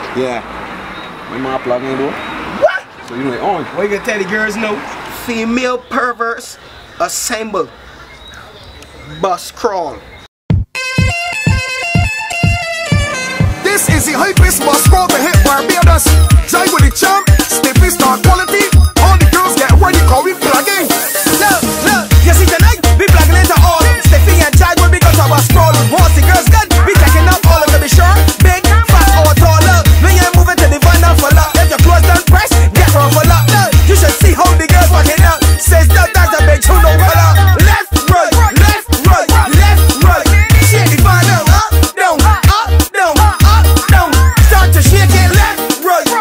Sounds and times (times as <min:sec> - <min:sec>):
Speech: 0:01.3 - 0:07.7, 0:09.0 - 0:10.0
Music: 0:10.5 - 0:46.2.